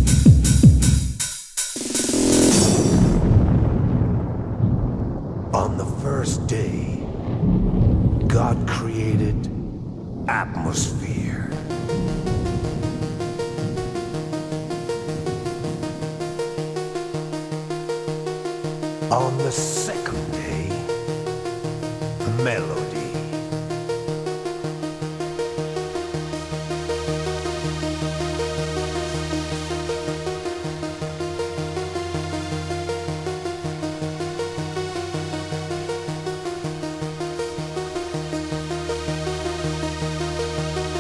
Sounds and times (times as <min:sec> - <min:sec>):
Music: 0:00.0 - 0:03.6, 0:11.0 - 0:41.0
Speech: 0:05.6 - 0:07.0, 0:08.3 - 0:09.5, 0:10.3 - 0:11.6, 0:19.1 - 0:20.9, 0:22.3 - 0:23.4.